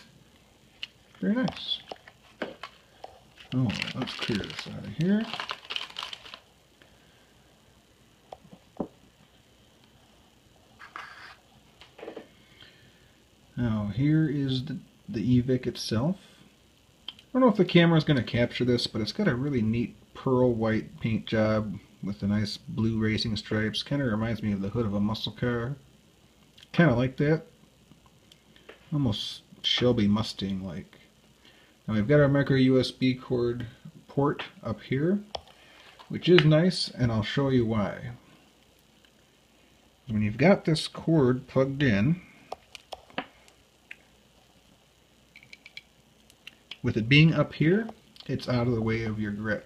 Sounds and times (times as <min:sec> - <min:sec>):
Inside, small room: 0:00.0 - 0:49.6
Speech: 0:01.2 - 0:01.9, 0:03.5 - 0:05.4, 0:13.6 - 0:16.3, 0:17.3 - 0:25.9, 0:26.6 - 0:27.5, 0:28.9 - 0:31.1, 0:31.9 - 0:35.3, 0:36.1 - 0:38.2, 0:40.1 - 0:42.3, 0:46.8 - 0:49.6.